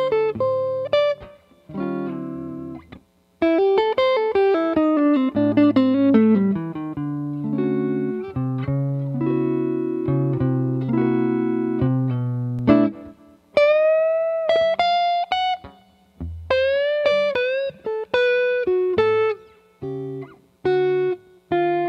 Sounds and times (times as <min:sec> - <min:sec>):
Distortion: 0:00.0 - 0:21.8
Music: 0:00.0 - 0:21.8.